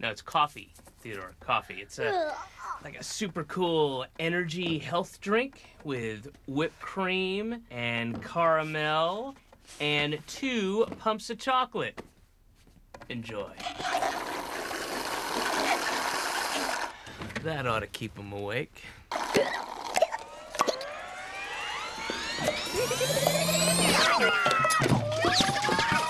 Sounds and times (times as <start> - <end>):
Speech: 0.0 - 12.0, 13.1 - 13.6, 17.4 - 18.9.